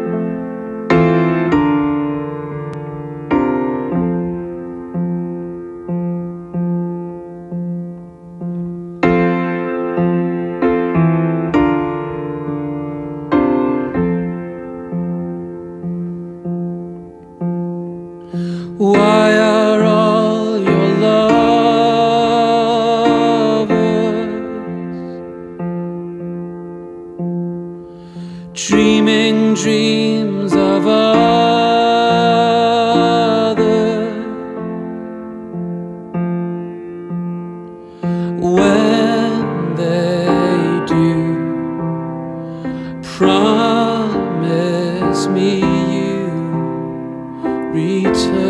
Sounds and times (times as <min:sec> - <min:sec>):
Music: 0:00.0 - 0:48.4.